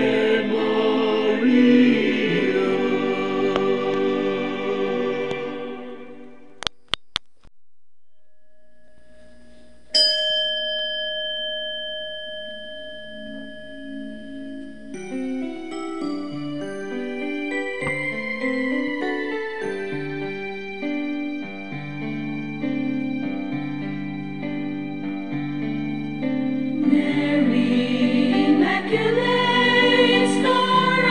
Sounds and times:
Tuning fork: 8.0 - 26.8.

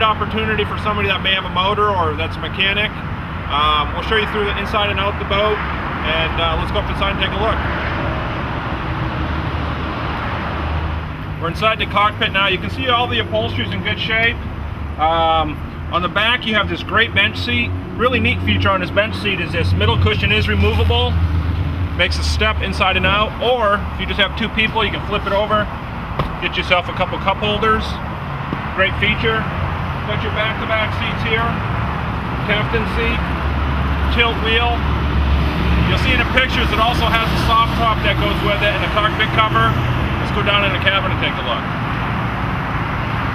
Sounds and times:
Speech: 0.0 - 7.6, 11.4 - 14.4, 15.0 - 21.2, 22.0 - 25.7, 26.4 - 28.0, 28.8 - 31.6, 32.4 - 33.2, 34.1 - 34.8, 35.8 - 41.7.

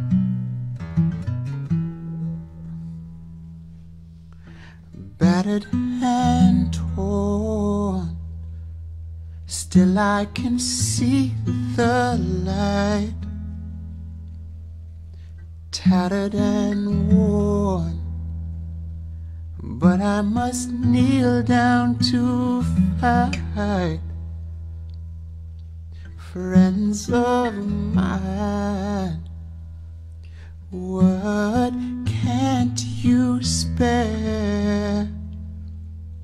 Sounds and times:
Music: 0.0 - 36.2.

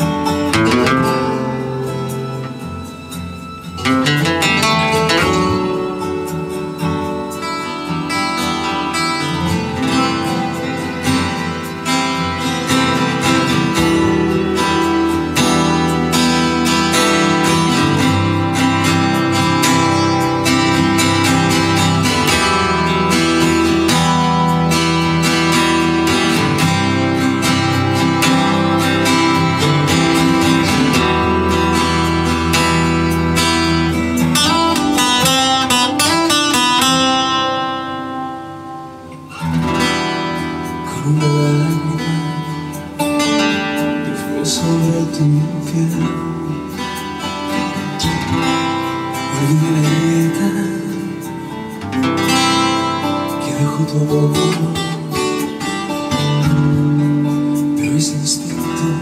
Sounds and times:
Guitar: 0.0 - 59.0.

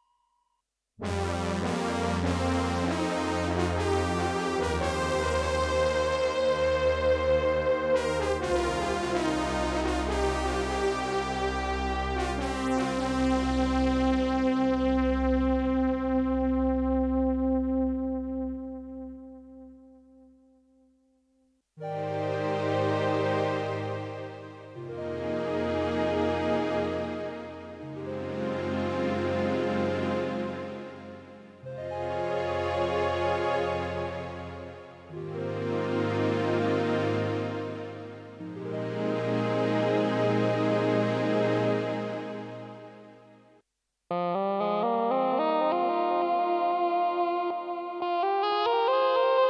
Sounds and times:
Music: 1.0 - 49.4.

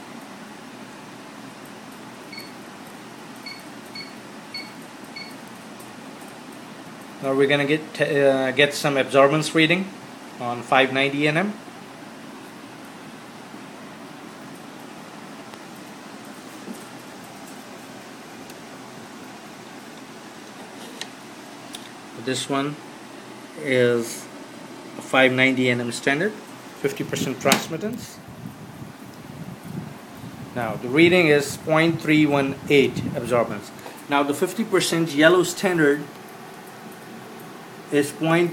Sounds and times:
Speech: 7.2 - 11.6, 22.2 - 22.8, 23.6 - 24.3, 25.0 - 28.2, 30.6 - 36.1, 37.9 - 38.5.

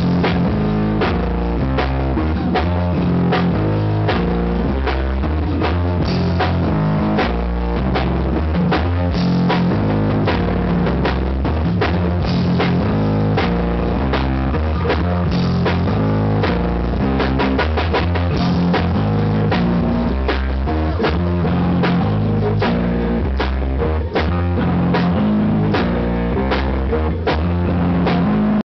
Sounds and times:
Music: 0.0 - 28.6.

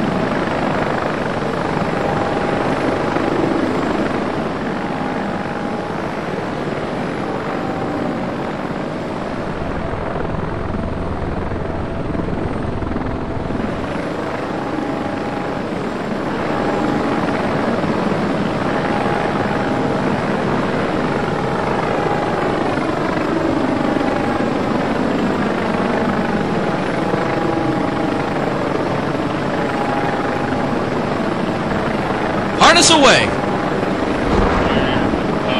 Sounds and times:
Helicopter: 0.0 - 35.6
Outside, rural or natural: 0.0 - 35.6.

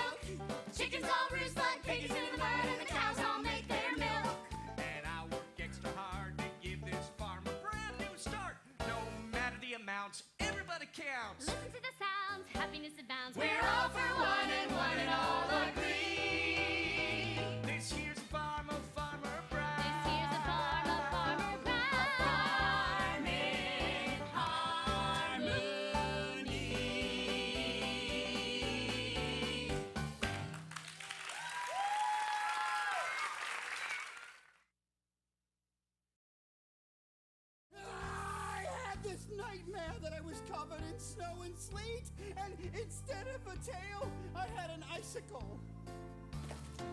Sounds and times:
Music: 0.0 - 31.0, 37.8 - 46.9.

